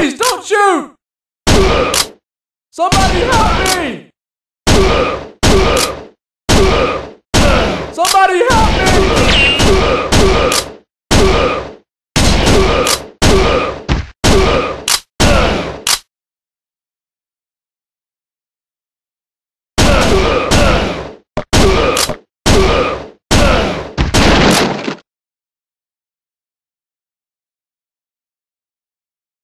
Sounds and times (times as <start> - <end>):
Outside, urban or manmade: 0.0 - 16.1, 19.8 - 25.1.